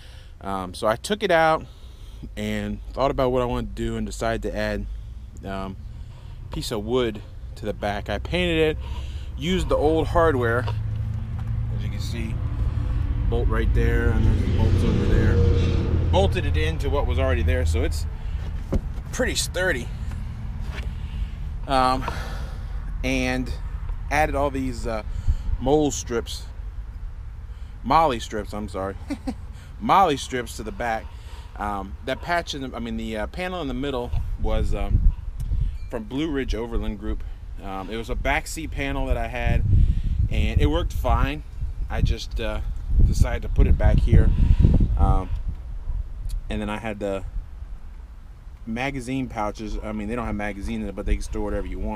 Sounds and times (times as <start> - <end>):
Speech: 0.4 - 1.7, 2.4 - 5.8, 6.6 - 8.8, 9.4 - 10.8, 11.7 - 12.4, 13.3 - 15.5, 16.1 - 18.1, 19.1 - 19.9, 21.7 - 22.0, 23.0 - 25.0, 25.6 - 26.5, 27.9 - 29.0, 29.8 - 31.0, 31.6 - 35.0, 36.0 - 39.6, 40.3 - 44.3, 45.0 - 45.4, 46.3 - 47.3, 48.7 - 51.9.